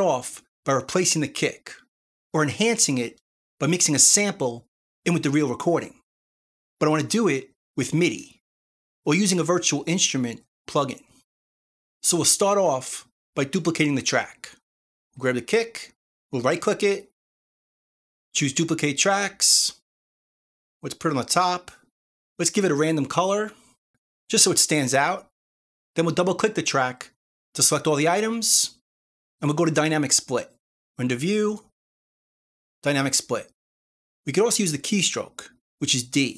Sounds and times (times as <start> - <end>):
Speech: 0.0 - 6.0, 6.8 - 8.4, 9.1 - 11.2, 12.0 - 14.6, 15.2 - 17.2, 18.4 - 19.8, 20.8 - 23.6, 24.3 - 25.3, 26.0 - 28.8, 29.4 - 31.7, 32.8 - 33.6, 34.3 - 36.3.